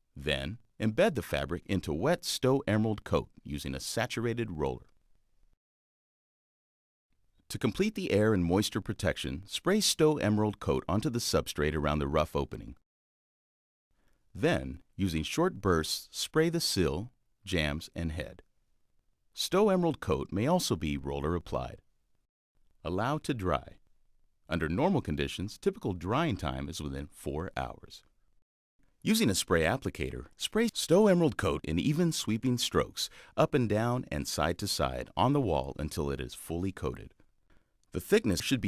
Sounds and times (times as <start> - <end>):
Speech: 0.2 - 4.9, 7.5 - 12.8, 14.4 - 18.4, 19.4 - 21.8, 22.8 - 23.8, 24.5 - 28.0, 29.0 - 37.2, 37.9 - 38.6.